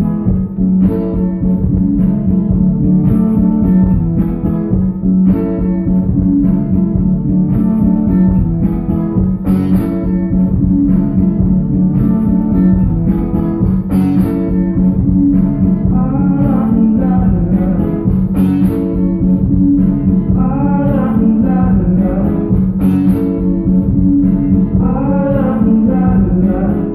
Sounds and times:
Inside, large room or hall: 0.0s - 26.9s.

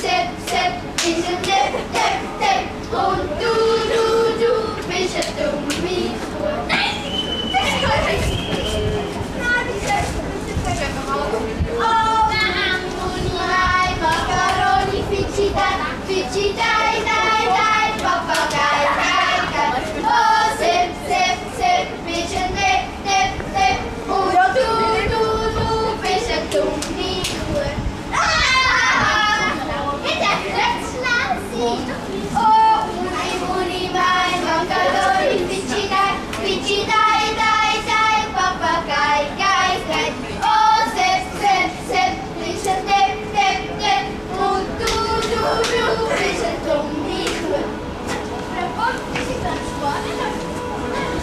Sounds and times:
Speech: 5.8s - 14.3s, 27.2s - 36.9s, 45.0s - 51.2s.

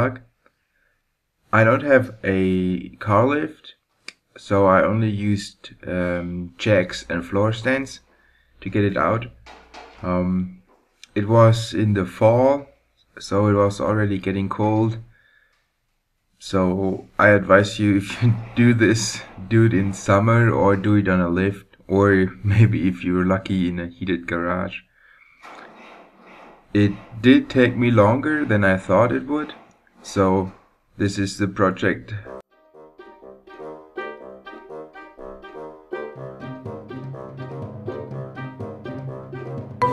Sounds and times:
Speech: 0.0s - 0.3s, 1.6s - 3.8s, 4.4s - 9.4s, 10.0s - 15.1s, 16.4s - 24.9s, 26.8s - 32.4s
Engine starting: 18.0s - 19.8s, 25.2s - 29.8s.

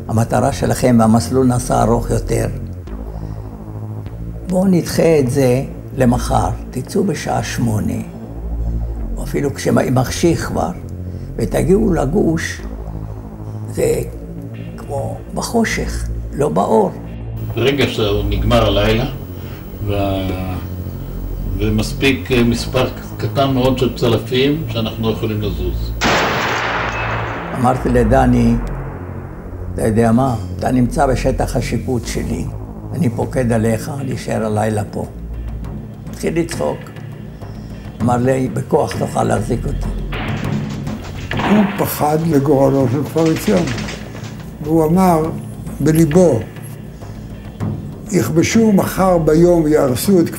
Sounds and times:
Music: 0.0s - 50.3s
Speech: 0.1s - 2.6s, 4.5s - 8.1s, 14.8s - 19.2s, 19.8s - 20.7s, 21.6s - 26.0s, 27.6s - 28.7s, 29.8s - 35.1s, 36.2s - 36.9s, 38.0s - 39.9s, 41.4s - 43.8s, 44.6s - 46.5s, 48.1s - 50.3s
Fusillade: 26.0s - 27.8s, 40.2s - 44.6s.

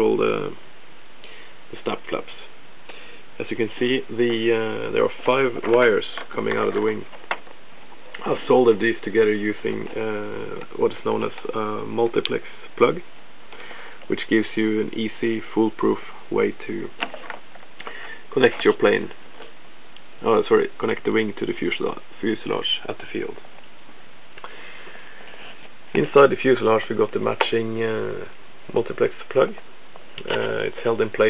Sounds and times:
Speech: 0.0s - 0.6s, 1.7s - 2.6s, 3.4s - 7.2s, 8.2s - 13.1s, 14.1s - 17.0s, 18.3s - 19.2s, 20.2s - 23.5s, 25.9s - 29.6s, 30.2s - 31.3s.

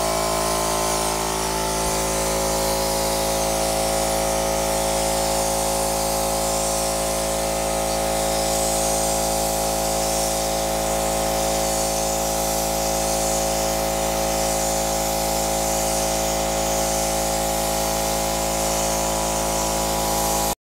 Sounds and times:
Spray: 0.0s - 20.6s.

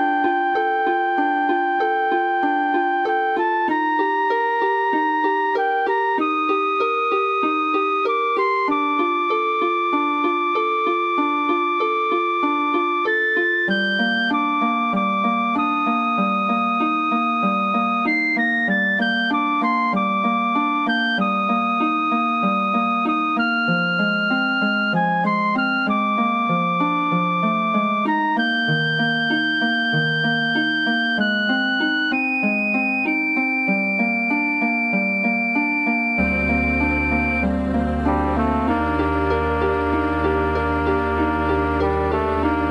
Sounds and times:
Music: 0.0s - 42.7s.

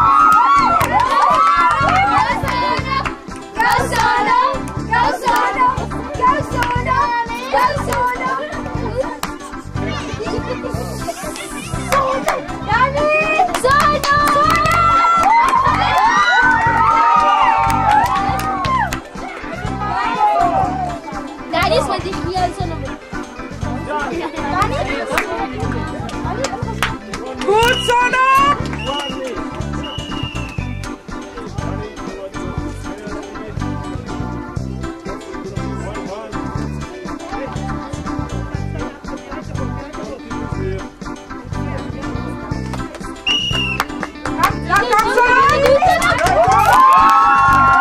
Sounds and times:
Music: 0.0s - 47.8s.

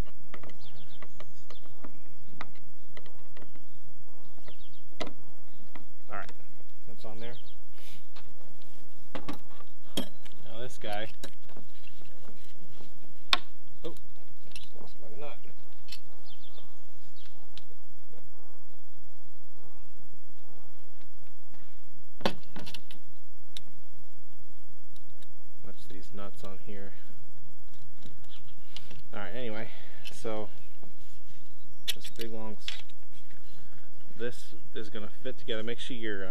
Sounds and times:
Speech: 6.1s - 7.4s, 10.4s - 11.1s, 14.8s - 15.5s, 25.6s - 27.0s, 29.1s - 30.6s, 32.1s - 32.8s, 34.2s - 36.3s.

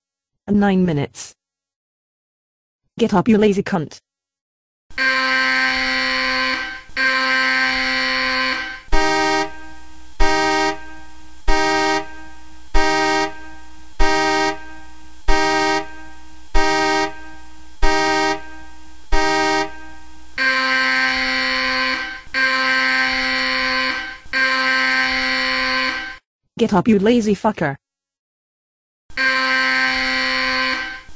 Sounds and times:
Speech: 0.5s - 1.4s, 3.0s - 4.0s, 26.6s - 27.8s.

